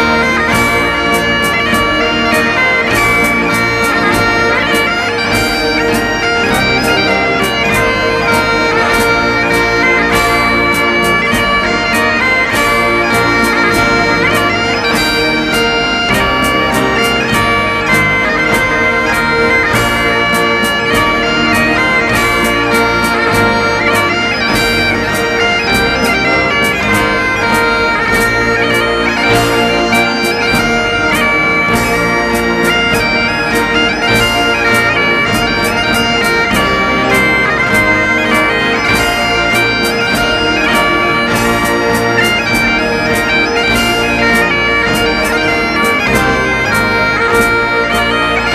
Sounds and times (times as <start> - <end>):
Bagpipes: 0.0 - 48.5.